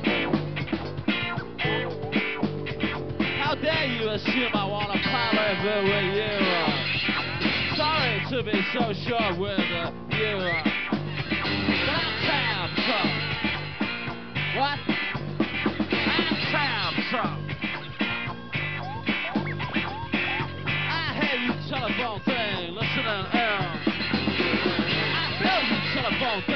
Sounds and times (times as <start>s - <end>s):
Music: 0.0s - 26.5s.